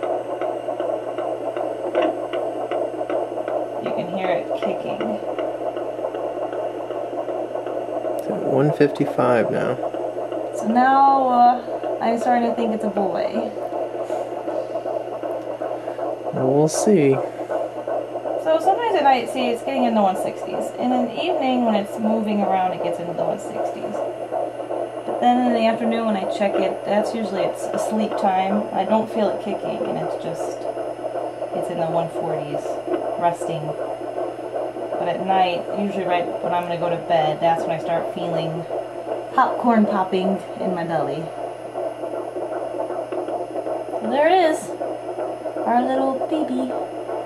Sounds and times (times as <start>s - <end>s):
Speech: 3.8s - 5.2s, 8.2s - 9.8s, 10.6s - 13.5s, 16.4s - 17.3s, 18.5s - 24.0s, 25.2s - 30.6s, 31.6s - 33.8s, 35.0s - 38.7s, 39.4s - 41.3s, 44.0s - 44.7s, 45.7s - 46.8s.